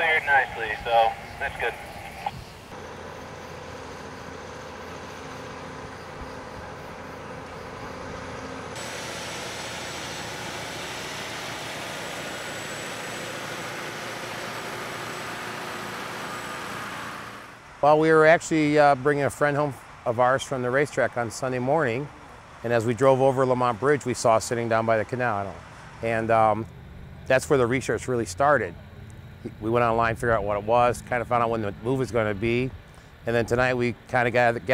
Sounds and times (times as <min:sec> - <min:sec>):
Truck: 0:00.0 - 0:34.7.